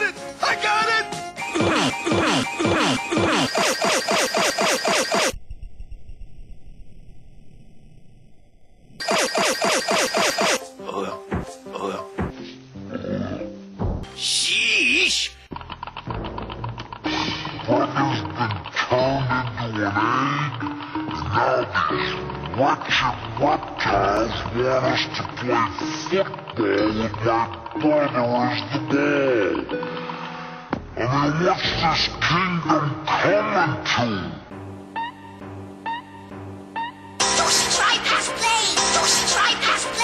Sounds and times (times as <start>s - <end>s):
Speech: 0.0s - 1.1s, 14.2s - 15.4s, 18.9s - 20.5s, 22.6s - 29.7s, 31.0s - 34.4s
Music: 0.0s - 3.5s, 10.0s - 40.0s.